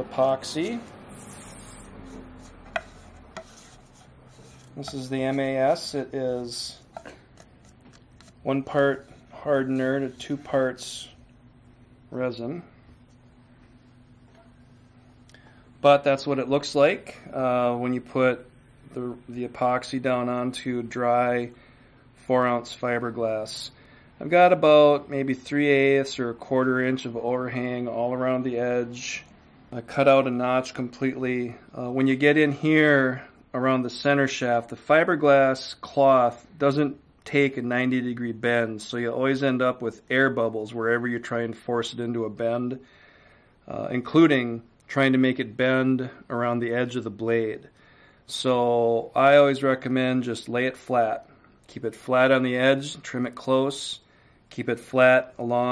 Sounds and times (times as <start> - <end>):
Speech: 0.0 - 0.9, 4.8 - 6.9, 8.4 - 11.2, 12.1 - 12.8, 15.8 - 21.6, 22.2 - 42.8, 43.7 - 47.7, 48.3 - 55.7.